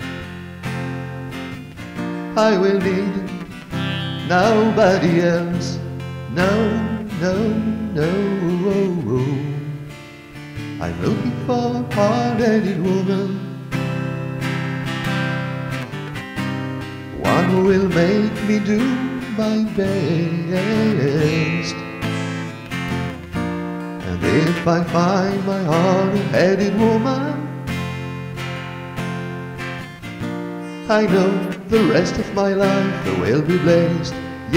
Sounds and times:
Music: 0:00.0 - 0:34.5.

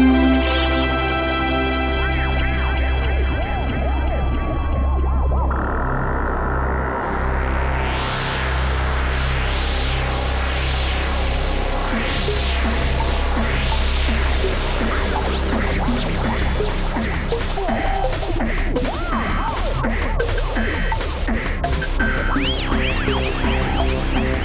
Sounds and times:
Trance music: 0:00.0 - 0:24.4.

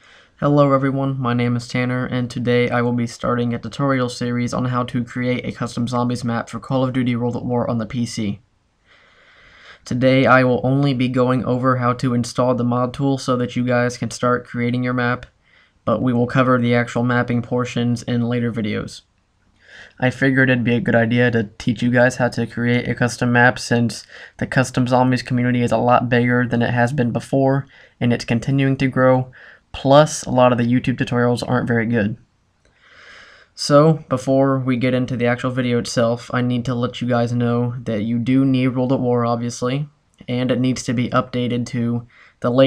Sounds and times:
Speech: 0:00.4 - 0:08.4, 0:09.8 - 0:15.3, 0:15.9 - 0:19.1, 0:19.9 - 0:32.2, 0:33.6 - 0:42.6.

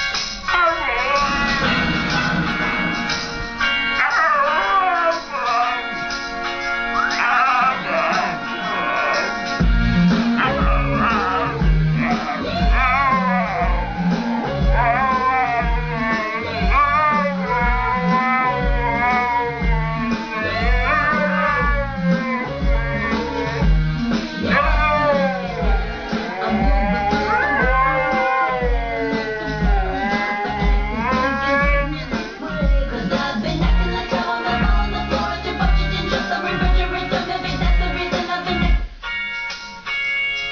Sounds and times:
Music: 0:00.0 - 0:40.5
Whimper (dog): 0:04.0 - 0:05.9, 0:10.5 - 0:23.7, 0:24.5 - 0:32.0
Male singing: 0:30.1 - 0:38.7
Female singing: 0:31.1 - 0:38.8.

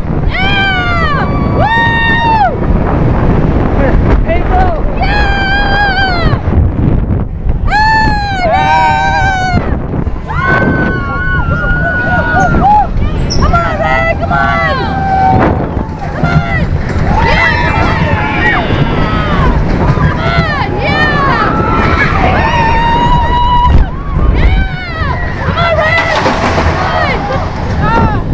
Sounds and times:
Wind noise (microphone): 0:00.0 - 0:28.3.

